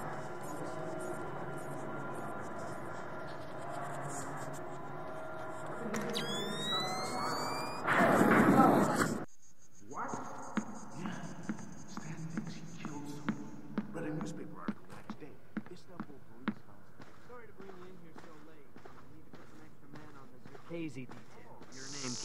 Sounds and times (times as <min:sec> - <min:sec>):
Speech: 0:00.0 - 0:22.2.